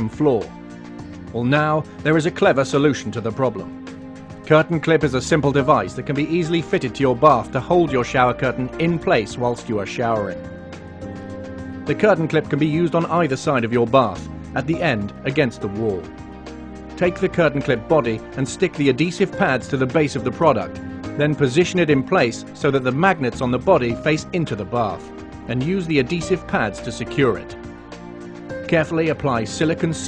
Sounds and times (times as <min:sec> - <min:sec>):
Speech: 0:00.0 - 0:00.5, 0:01.3 - 0:03.7, 0:04.5 - 0:10.4, 0:11.9 - 0:16.1, 0:17.0 - 0:27.6, 0:28.7 - 0:30.0
Music: 0:00.0 - 0:30.0.